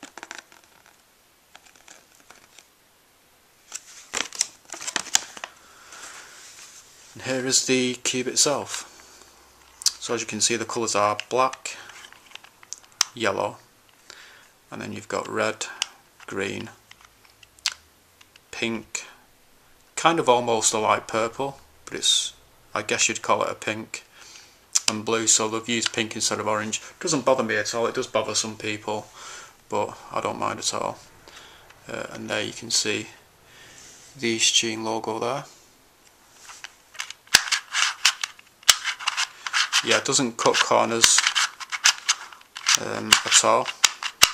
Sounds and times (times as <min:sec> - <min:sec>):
Inside, small room: 0:00.0 - 0:44.3
Speech: 0:07.2 - 0:08.9, 0:09.9 - 0:11.9, 0:13.1 - 0:13.6, 0:14.7 - 0:16.8, 0:18.5 - 0:19.2, 0:20.0 - 0:24.1, 0:24.8 - 0:29.1, 0:29.7 - 0:31.1, 0:31.8 - 0:33.2, 0:34.2 - 0:35.6, 0:39.8 - 0:41.3, 0:42.7 - 0:43.8.